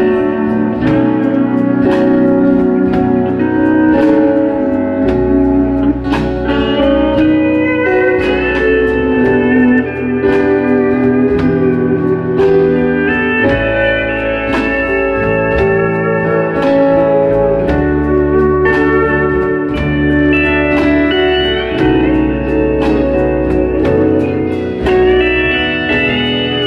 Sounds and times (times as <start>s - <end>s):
Electric piano: 0.0s - 26.6s.